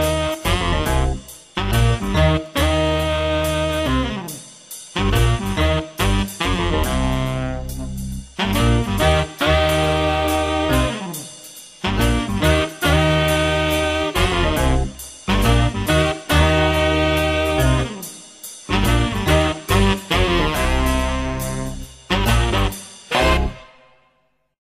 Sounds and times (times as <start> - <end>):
Exciting music: 0.0 - 4.4, 5.0 - 23.8.